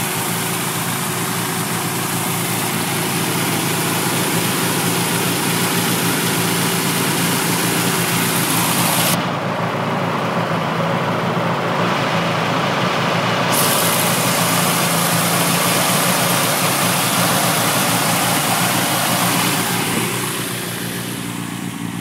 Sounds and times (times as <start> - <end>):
Vehicle: 0.0 - 22.0.